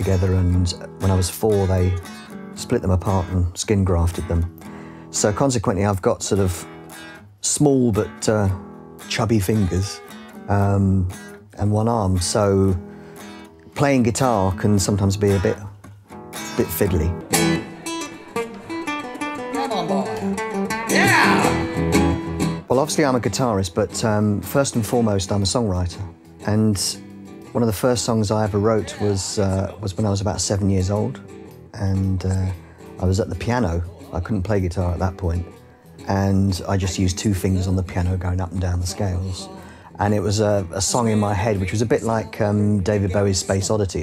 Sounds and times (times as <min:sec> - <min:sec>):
Speech: 0:00.0 - 0:02.0, 0:02.6 - 0:04.5, 0:05.1 - 0:06.7, 0:07.4 - 0:12.8, 0:13.8 - 0:15.8, 0:16.6 - 0:17.2, 0:20.9 - 0:21.6, 0:22.7 - 0:31.2, 0:31.8 - 0:35.5, 0:36.1 - 0:44.0
Independent music: 0:00.0 - 0:44.0.